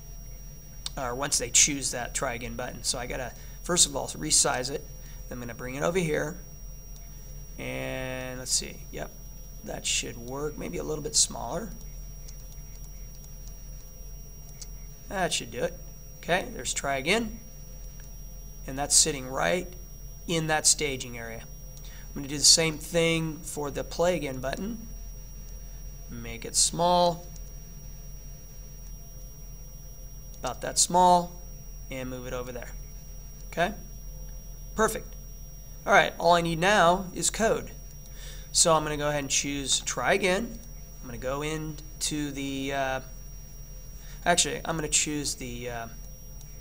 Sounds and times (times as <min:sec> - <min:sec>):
Speech: 0:00.9 - 0:06.4, 0:07.6 - 0:11.8, 0:15.1 - 0:17.4, 0:18.7 - 0:21.5, 0:22.2 - 0:24.9, 0:26.1 - 0:27.3, 0:30.4 - 0:32.8, 0:33.5 - 0:33.8, 0:34.8 - 0:35.1, 0:35.9 - 0:37.8, 0:38.5 - 0:43.1, 0:44.2 - 0:46.0.